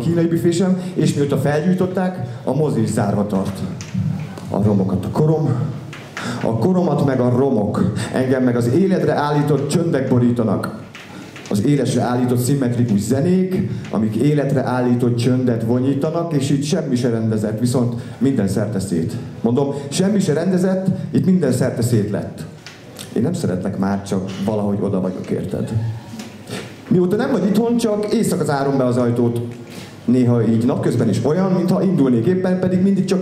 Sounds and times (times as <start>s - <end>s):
Speech: 0.0s - 5.8s, 6.4s - 10.8s, 11.5s - 26.1s, 26.9s - 33.2s.